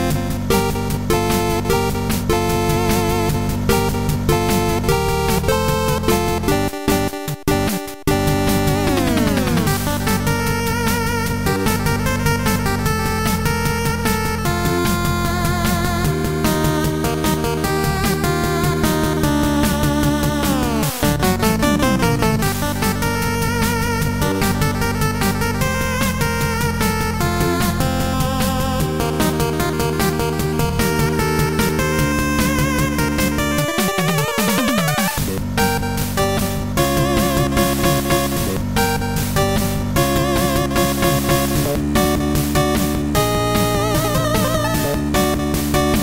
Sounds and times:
Soundtrack music: 0.0s - 46.0s.

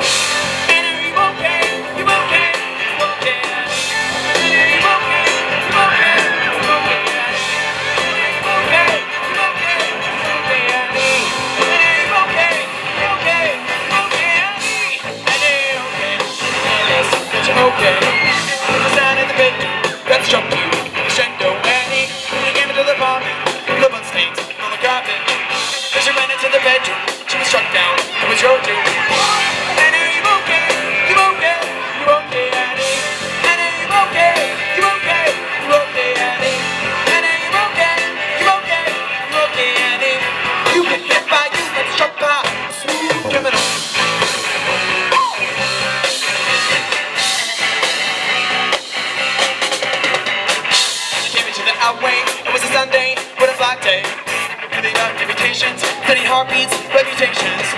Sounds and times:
Music: 0.0s - 57.7s
Male singing: 0.4s - 43.8s, 51.2s - 57.7s.

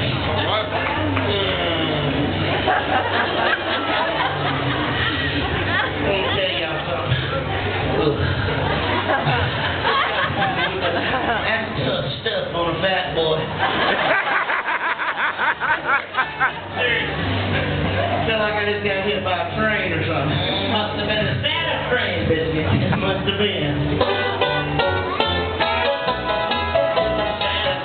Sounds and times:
Music: 0.0s - 13.6s, 15.6s - 27.8s
Speech: 10.6s - 13.5s, 18.2s - 23.8s.

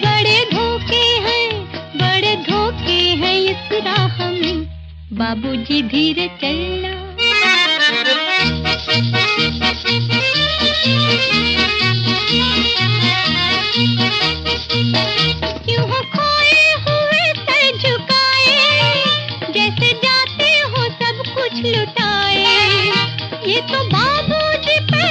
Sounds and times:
Music of Bollywood: 0.0s - 25.1s.

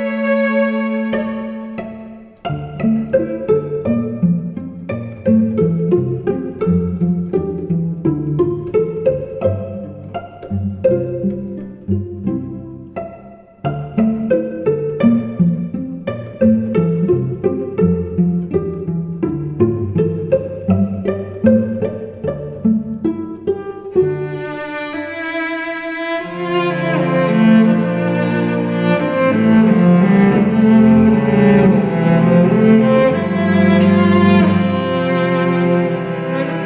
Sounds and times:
Cello: 0.0s - 36.6s.

